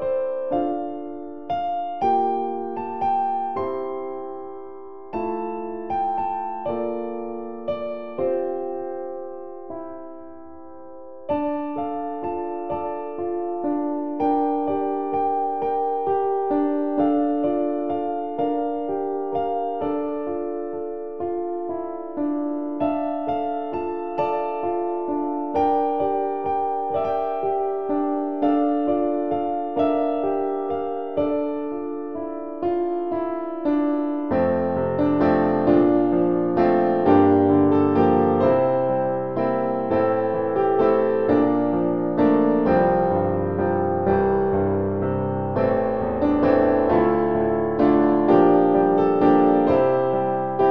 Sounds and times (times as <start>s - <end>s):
Music: 0.0s - 50.7s.